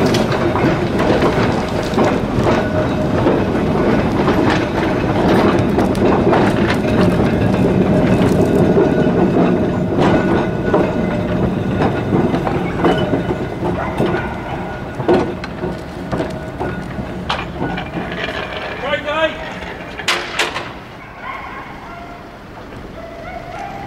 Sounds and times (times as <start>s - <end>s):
Vehicle: 0.0s - 23.8s
Speech: 18.8s - 19.5s.